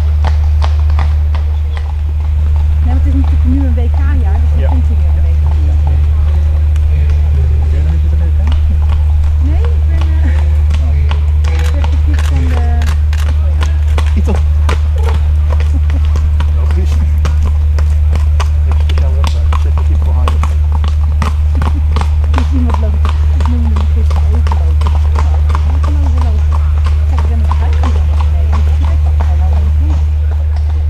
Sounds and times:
Clip-clop: 0.0s - 30.9s
Speech: 2.8s - 17.5s, 18.5s - 20.6s, 22.4s - 30.9s.

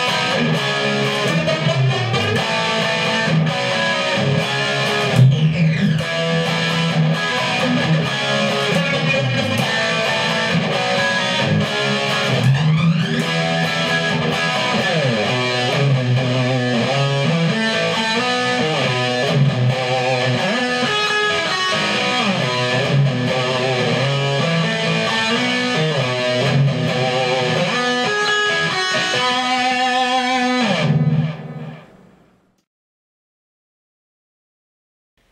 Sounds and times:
Electric guitar: 0.0s - 32.3s.

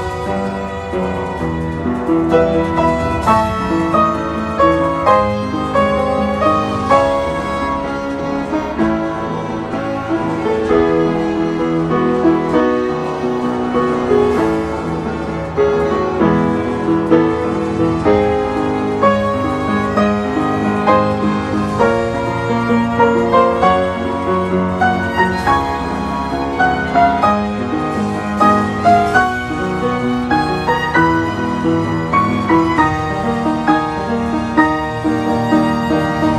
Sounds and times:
Violin, fiddle: 0.0s - 36.3s.

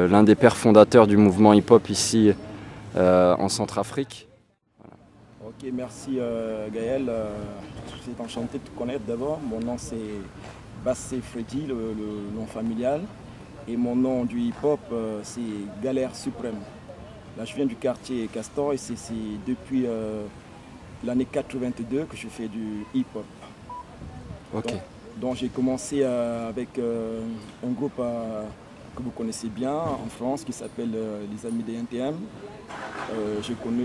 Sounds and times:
Speech: 5.4s - 20.4s, 24.0s - 33.8s.

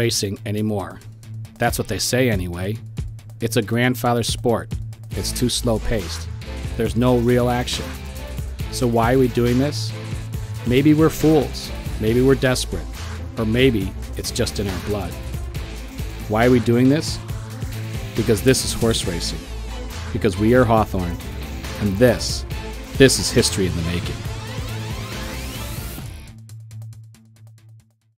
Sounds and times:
Speech: 0.0s - 1.0s, 1.6s - 2.8s, 3.4s - 8.0s, 8.7s - 10.0s, 10.7s - 15.2s, 16.3s - 17.2s, 18.2s - 19.4s, 20.2s - 21.2s, 21.8s - 22.4s, 23.0s - 24.2s
Music: 0.0s - 28.1s.

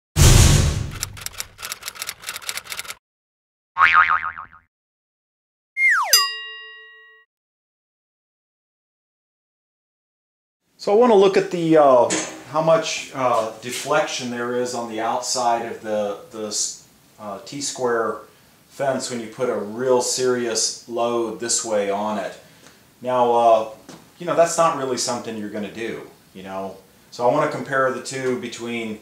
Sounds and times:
Boing: 3.8s - 4.7s, 5.8s - 6.3s.

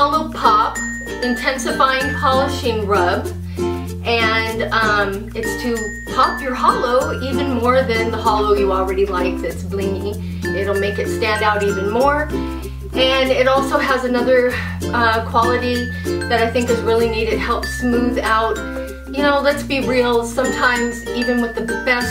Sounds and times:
Speech: 0.0s - 3.3s, 4.0s - 12.3s, 13.0s - 22.1s
Music: 0.0s - 22.1s.

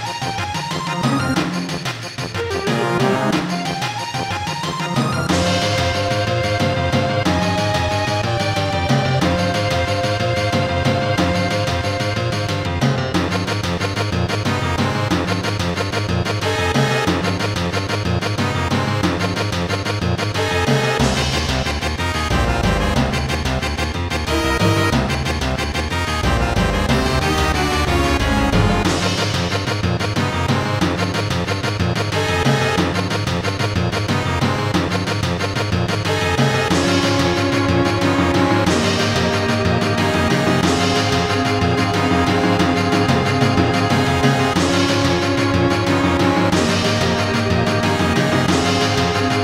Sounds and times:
Video game music: 0.0s - 49.4s.

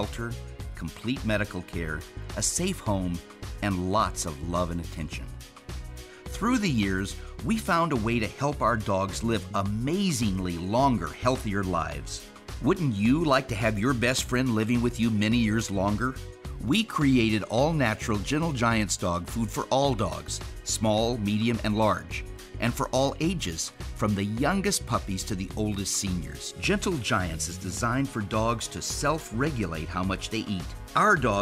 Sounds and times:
Speech: 0.0s - 5.4s, 6.3s - 31.4s
Music: 0.0s - 31.4s.

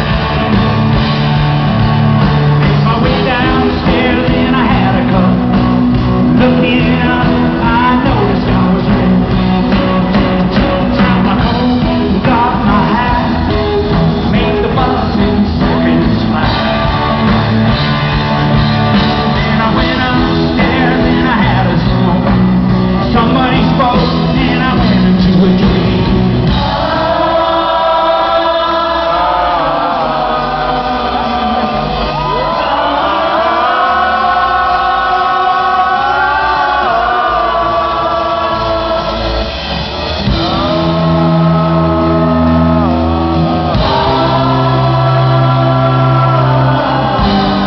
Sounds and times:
Rock music: 0.0s - 47.6s.

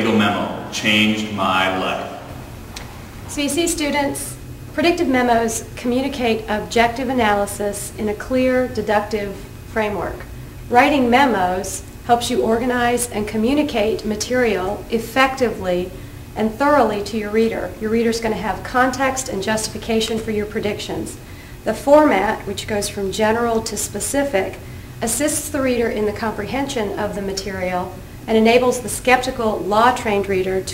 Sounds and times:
Female speech, woman speaking: 3.3s - 30.7s.

